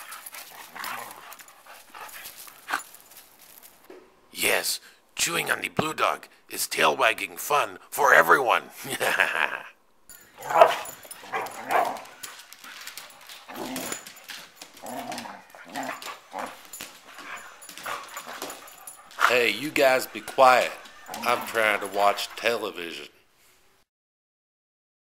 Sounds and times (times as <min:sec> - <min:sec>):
Speech: 0:04.4 - 0:08.8, 0:19.2 - 0:23.2
Bow-wow: 0:10.4 - 0:12.2, 0:20.2 - 0:22.4.